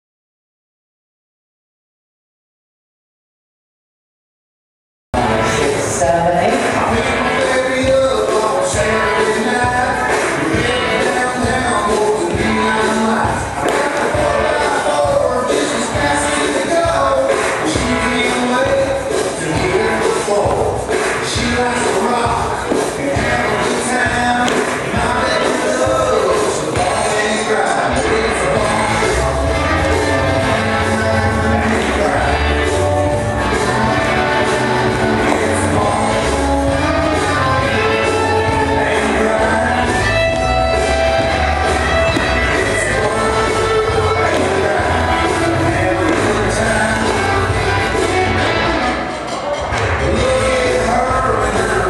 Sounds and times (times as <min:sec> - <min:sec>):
Music: 0:05.2 - 0:51.8.